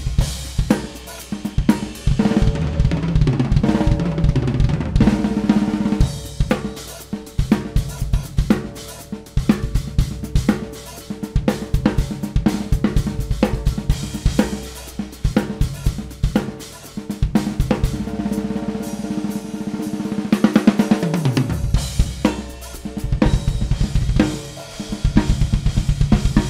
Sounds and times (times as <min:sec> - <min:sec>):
Bass drum: 0:00.0 - 0:00.9, 0:01.5 - 0:06.8, 0:11.4 - 0:16.5, 0:21.3 - 0:26.5
Drum kit: 0:00.0 - 0:26.5
Snare drum: 0:20.0 - 0:26.5.